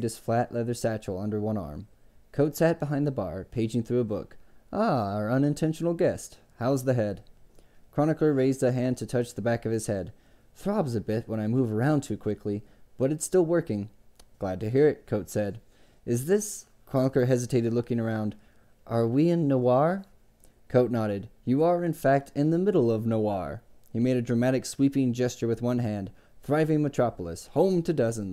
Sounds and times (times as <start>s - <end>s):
Speech: 0.0s - 7.3s, 7.9s - 20.1s, 20.7s - 28.3s.